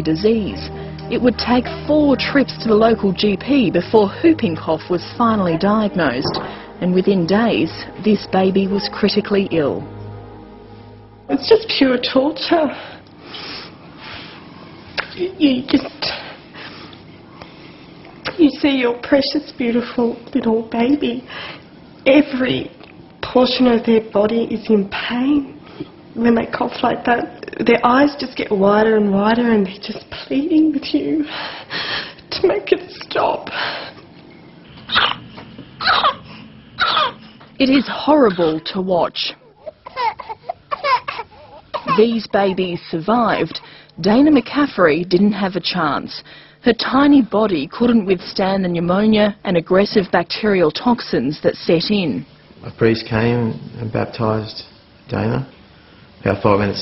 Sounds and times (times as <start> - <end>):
Cough: 34.9 - 36.2, 36.8 - 37.2
Speech: 37.6 - 39.4, 41.9 - 55.6, 56.2 - 56.8.